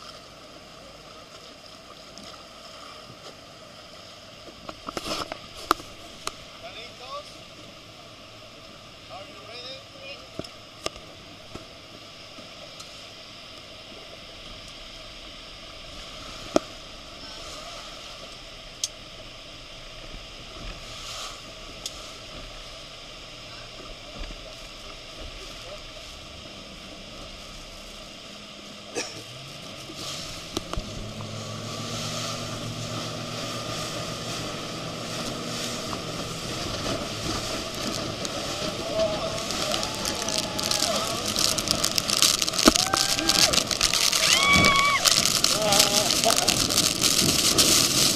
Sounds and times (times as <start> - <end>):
Sailboat, sailing ship: 0.0 - 48.1.